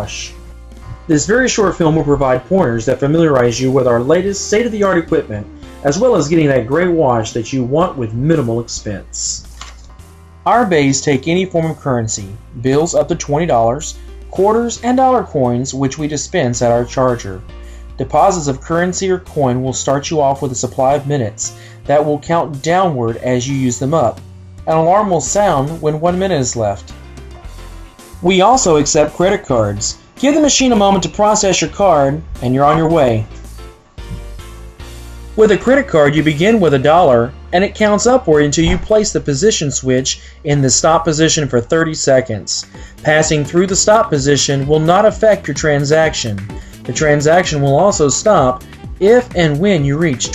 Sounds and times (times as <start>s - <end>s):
Speech: 0.0s - 0.4s, 1.0s - 9.7s, 10.5s - 27.0s, 28.2s - 33.4s, 35.4s - 50.3s
Music: 0.0s - 50.3s.